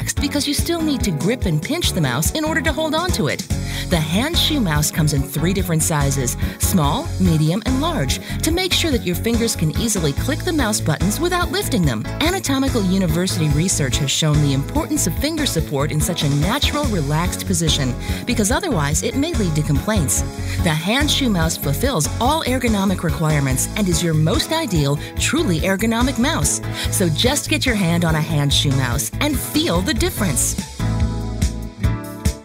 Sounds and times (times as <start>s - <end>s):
Speech: 0.0s - 30.6s
Music: 0.0s - 32.4s.